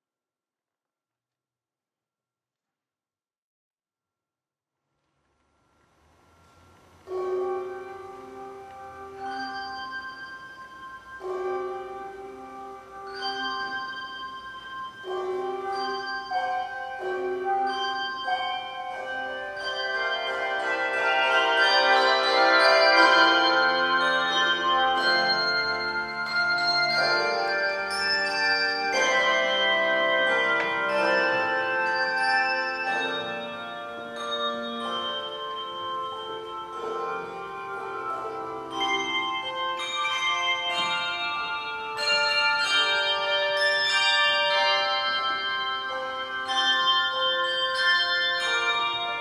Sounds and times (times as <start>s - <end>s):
Music: 5.6s - 49.2s.